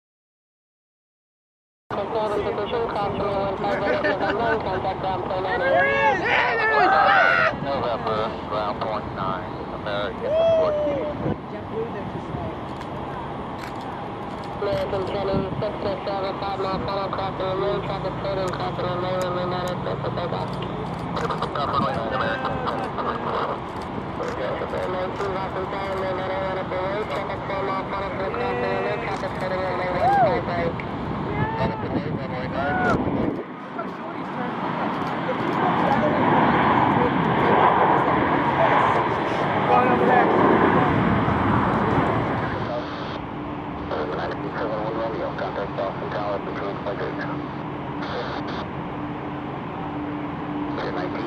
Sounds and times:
Speech: 24.2s - 33.0s, 43.9s - 47.5s.

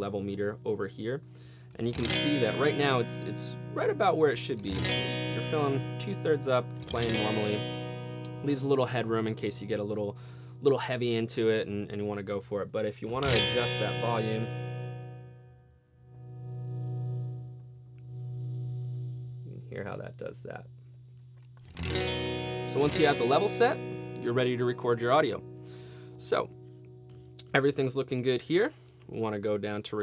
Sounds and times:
Distortion: 0.0s - 30.0s.

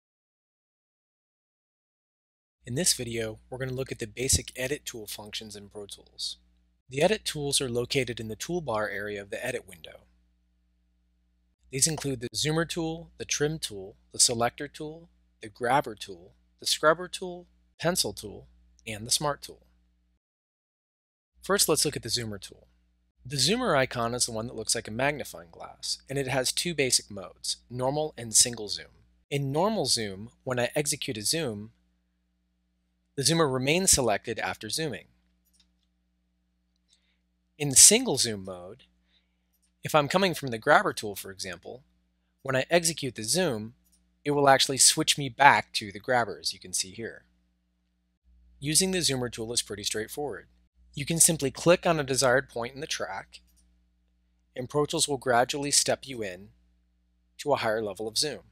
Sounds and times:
Speech: 2.7s - 10.0s, 11.8s - 19.6s, 21.4s - 22.7s, 23.3s - 31.7s, 33.2s - 35.1s, 37.6s - 38.8s, 39.9s - 41.8s, 42.5s - 47.2s, 48.6s - 50.4s, 51.0s - 53.4s, 54.6s - 56.5s, 57.4s - 58.5s.

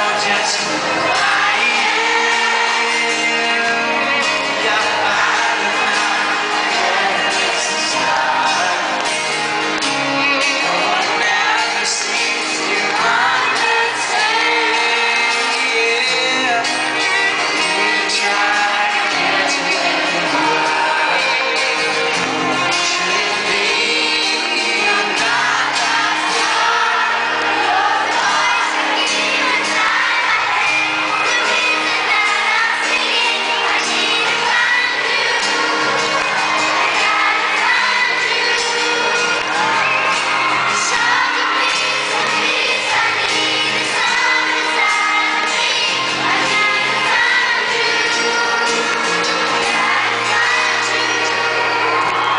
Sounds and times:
Male singing: 0.0s - 8.9s, 10.6s - 22.1s, 22.8s - 26.0s
Choir: 0.0s - 52.3s.

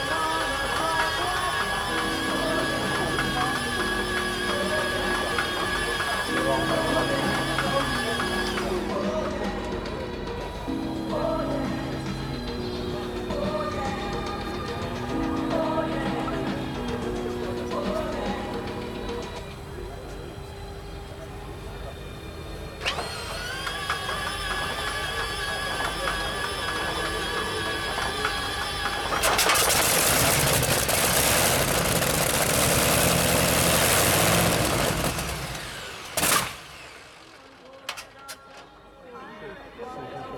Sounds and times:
Heavy engine (low frequency): 0.0s - 39.0s
Vehicle: 19.2s - 38.7s
Engine starting: 22.8s - 28.4s, 29.0s - 38.8s
Idling: 22.8s - 38.5s.

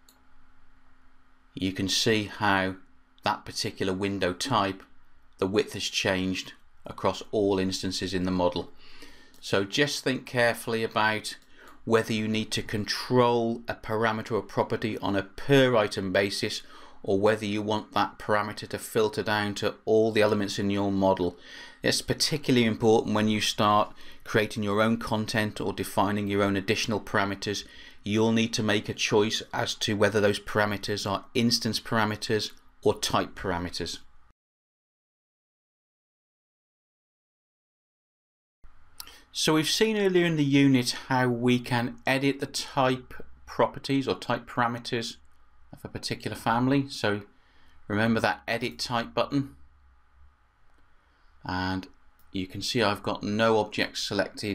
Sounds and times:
Speech: 1.6s - 8.7s, 9.4s - 34.0s, 39.0s - 45.2s, 45.8s - 47.3s, 47.9s - 49.6s, 51.4s - 54.5s.

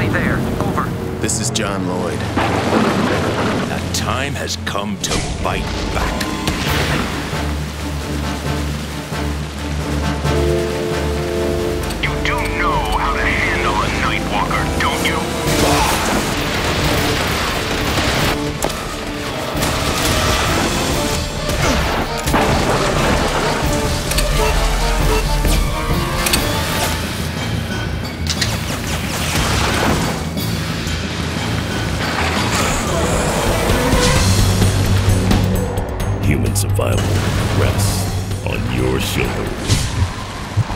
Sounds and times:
Speech: 0.0s - 2.2s, 3.7s - 6.2s, 12.0s - 16.0s, 36.2s - 39.6s
Music: 0.0s - 40.7s.

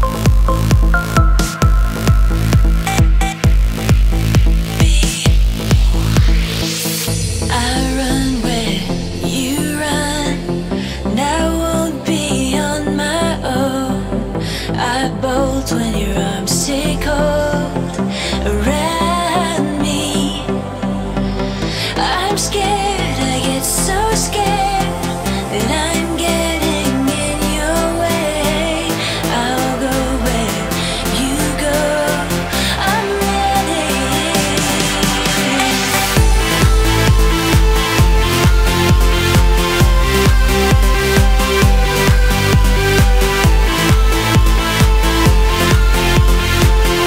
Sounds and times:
Pop music: 0.0s - 47.0s.

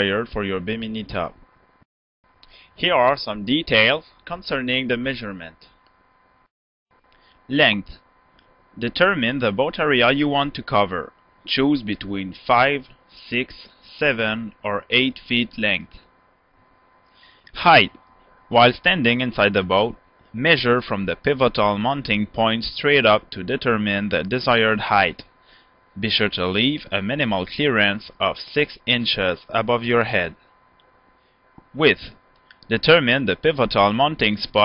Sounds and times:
Speech: 0.0s - 1.4s, 2.8s - 5.8s, 7.5s - 8.0s, 8.8s - 16.1s, 17.5s - 25.3s, 26.0s - 30.4s, 31.7s - 34.6s.

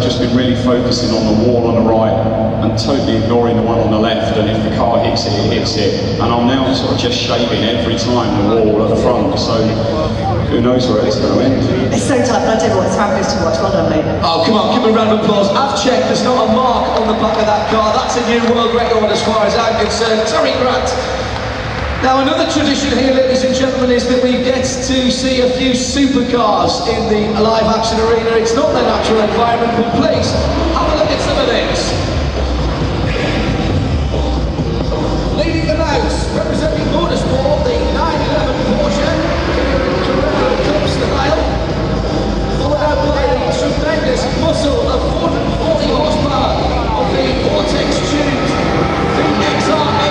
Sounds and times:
Speech: 0.0s - 21.2s, 22.0s - 32.1s, 35.4s - 41.6s, 42.5s - 50.1s.

